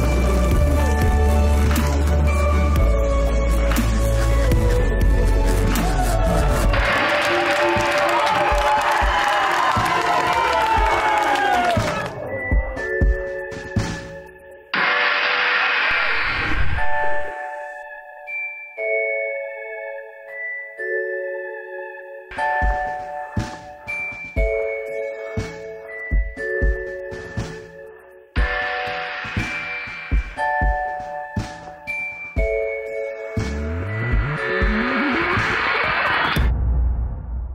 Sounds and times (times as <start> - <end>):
Music: 0.0 - 37.5.